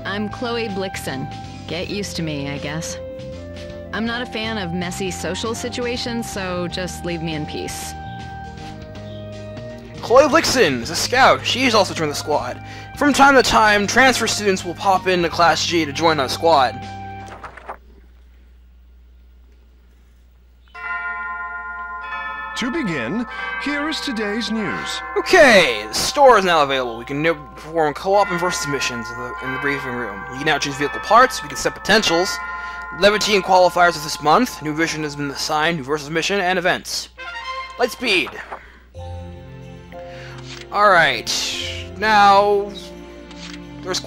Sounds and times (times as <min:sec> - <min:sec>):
Speech: 0:00.0 - 0:03.0, 0:03.9 - 0:08.0, 0:10.0 - 0:16.8, 0:22.6 - 0:32.4, 0:33.0 - 0:37.2, 0:37.8 - 0:38.5, 0:40.7 - 0:42.9, 0:43.8 - 0:44.0
Music: 0:00.0 - 0:17.4, 0:22.6 - 0:36.4, 0:37.1 - 0:44.0.